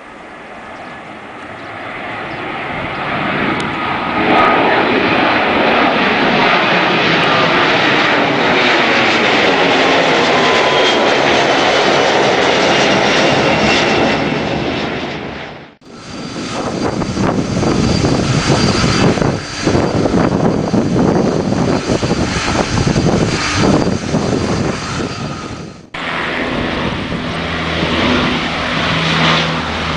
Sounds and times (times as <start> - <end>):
Fixed-wing aircraft, airplane: 0.0 - 29.9.